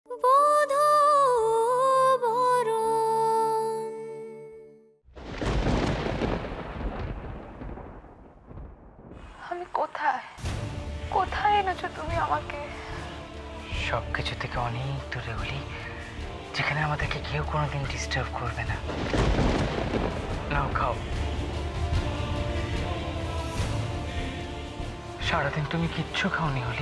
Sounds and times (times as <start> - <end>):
Music: 0.0 - 5.1, 10.4 - 26.8.